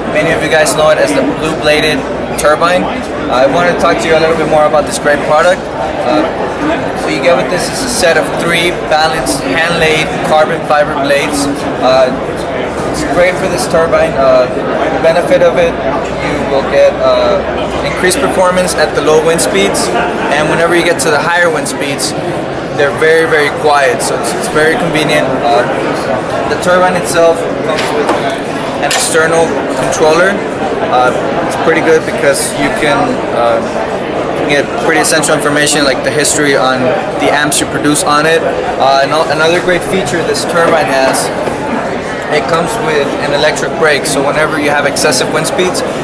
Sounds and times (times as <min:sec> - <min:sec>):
Speech: 0:00.0 - 0:46.0.